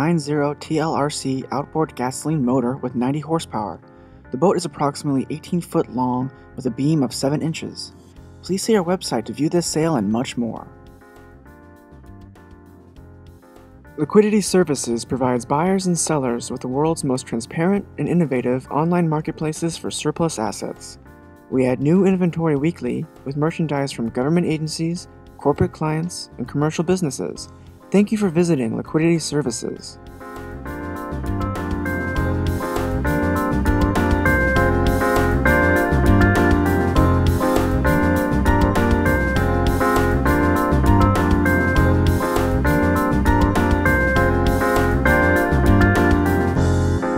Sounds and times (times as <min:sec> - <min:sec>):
Speech: 0:00.0 - 0:03.8, 0:04.4 - 0:10.7, 0:14.0 - 0:30.0
Music: 0:00.0 - 0:47.1.